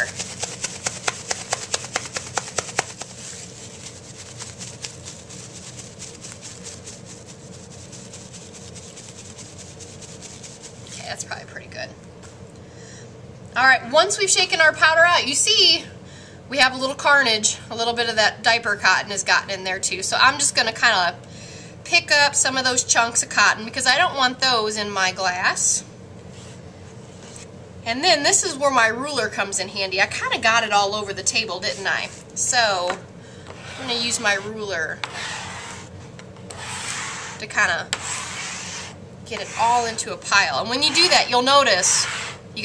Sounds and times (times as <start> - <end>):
Speech: 11.0 - 12.0, 13.6 - 15.9, 16.5 - 21.2, 21.9 - 25.9, 27.9 - 33.0, 33.8 - 35.0, 37.4 - 37.9, 39.3 - 42.0.